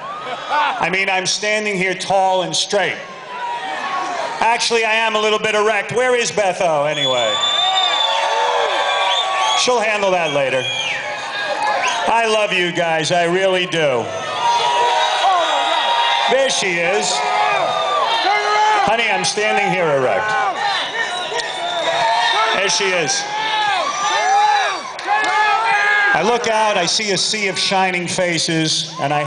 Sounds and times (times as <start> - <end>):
Male speech, man speaking: 0.8 - 3.0, 4.4 - 7.4, 9.6 - 10.7, 12.1 - 14.1, 16.3 - 17.2, 18.3 - 20.3, 22.4 - 23.3, 26.1 - 29.2.